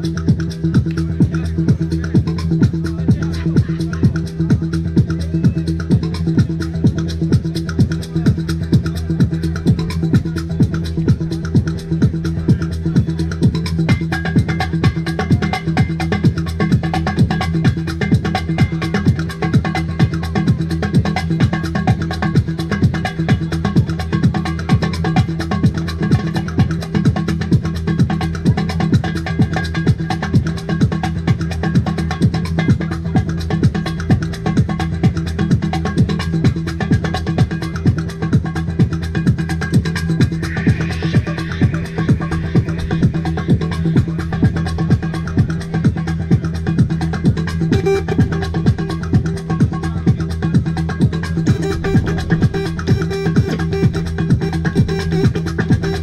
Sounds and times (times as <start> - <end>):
Electronic dance music: 0.0 - 56.0
Techno: 0.0 - 56.0
Trance music: 0.0 - 56.0.